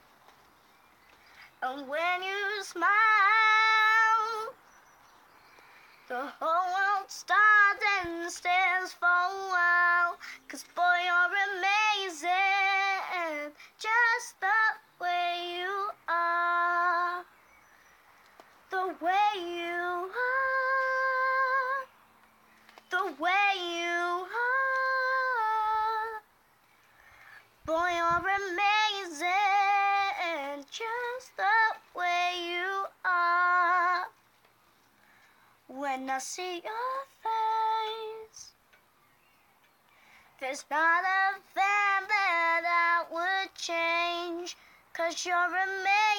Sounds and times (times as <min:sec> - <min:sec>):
Child singing: 0:01.6 - 0:04.6, 0:06.1 - 0:17.3, 0:18.7 - 0:21.9, 0:22.9 - 0:26.2, 0:27.6 - 0:34.2, 0:35.7 - 0:38.6, 0:40.4 - 0:46.1
Female singing: 0:01.6 - 0:04.6, 0:06.1 - 0:17.3, 0:18.7 - 0:21.9, 0:22.9 - 0:26.2, 0:27.7 - 0:34.2, 0:35.7 - 0:38.6, 0:40.4 - 0:46.1.